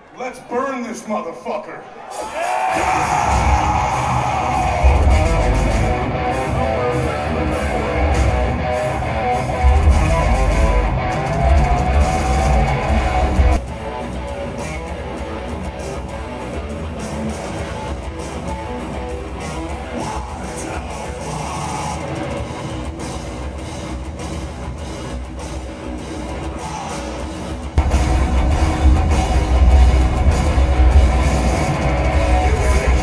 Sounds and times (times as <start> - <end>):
Music: 2.7 - 33.0.